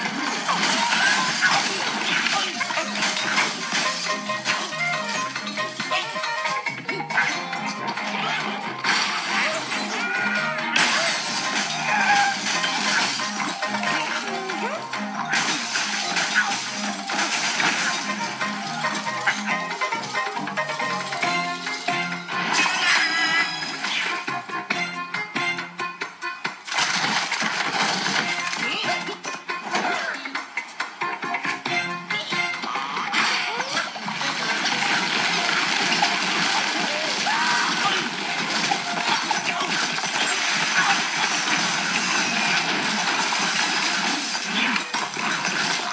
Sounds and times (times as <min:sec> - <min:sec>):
Water: 0:33.7 - 0:45.9.